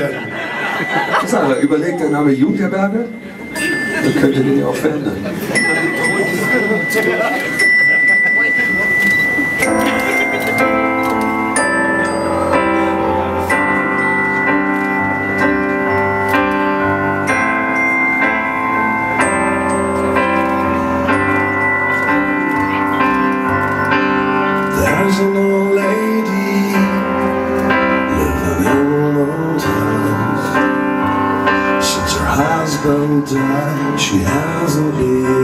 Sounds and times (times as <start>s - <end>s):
Music: 5.4s - 35.4s.